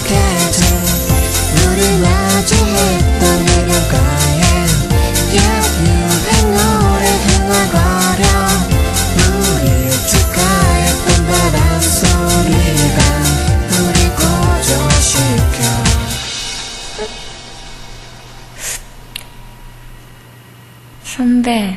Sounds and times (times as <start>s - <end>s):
Singing: 0.0s - 16.2s
Exciting music: 0.0s - 18.5s.